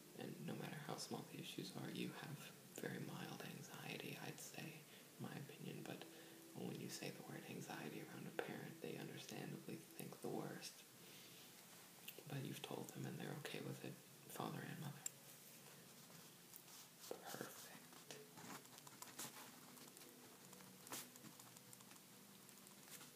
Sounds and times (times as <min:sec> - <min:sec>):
Inside, small room: 0:00.0 - 0:23.1
Speech: 0:06.6 - 0:10.8, 0:12.1 - 0:15.1.